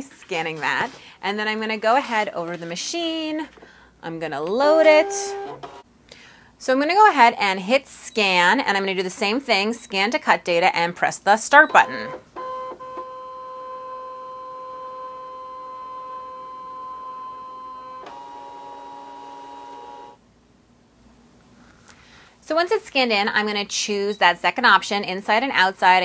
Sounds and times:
Speech: 0:00.0 - 0:05.3, 0:06.6 - 0:12.2, 0:22.4 - 0:26.0
Inside, small room: 0:00.0 - 0:26.0.

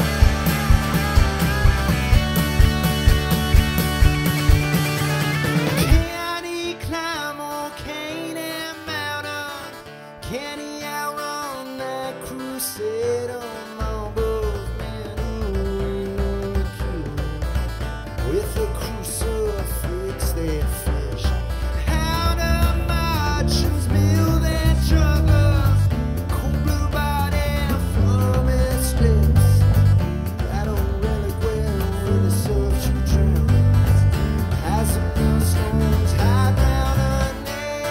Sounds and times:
Psychedelic rock: 0:00.0 - 0:37.9.

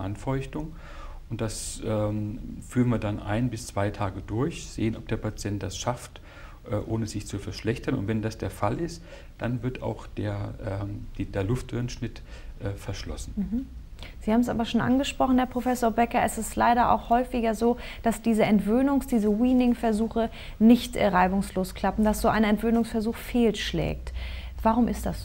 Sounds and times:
Conversation: 0:00.0 - 0:25.2.

